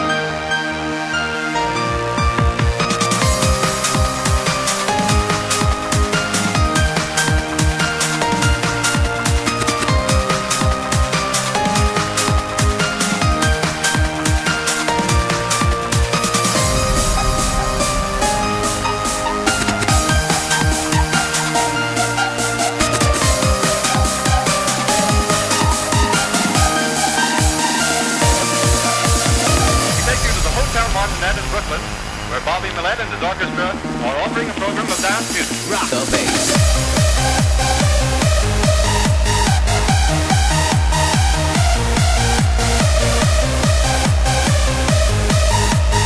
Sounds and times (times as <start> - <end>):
Music: 0.0 - 46.0.